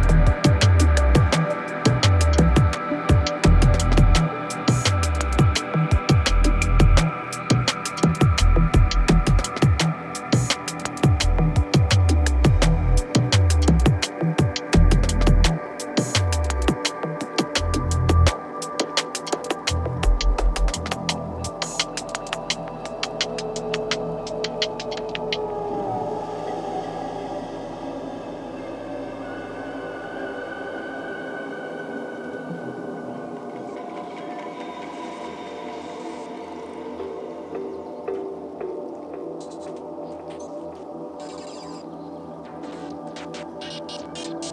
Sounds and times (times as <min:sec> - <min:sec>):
Electronic music: 0:00.0 - 0:44.5.